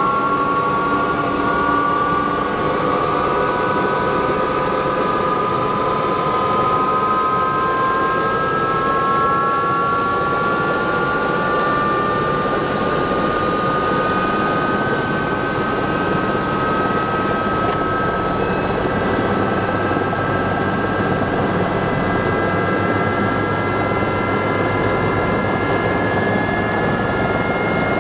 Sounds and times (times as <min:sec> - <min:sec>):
Aircraft: 0:00.0 - 0:28.0.